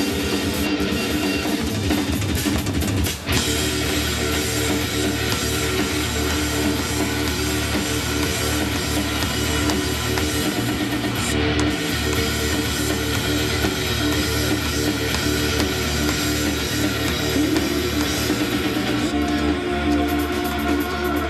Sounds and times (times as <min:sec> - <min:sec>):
Electric guitar: 0:00.0 - 0:21.3
Strum: 0:03.4 - 0:21.3.